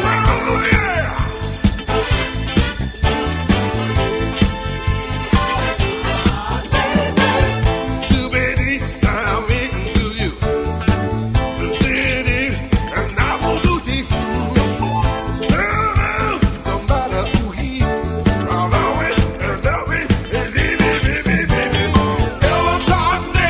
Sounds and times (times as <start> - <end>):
Disco: 0.0 - 23.5.